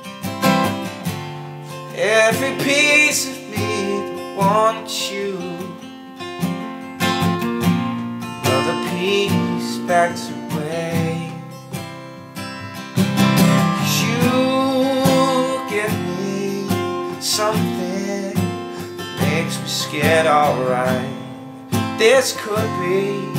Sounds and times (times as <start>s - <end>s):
Guitar: 0.0s - 23.3s.